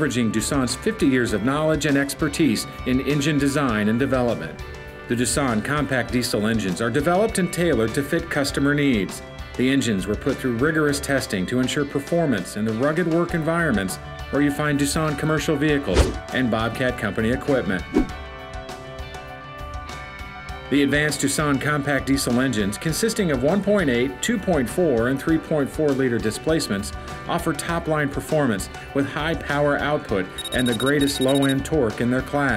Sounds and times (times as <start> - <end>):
Speech: 0.0 - 17.9, 20.7 - 32.5
Music: 0.0 - 32.5.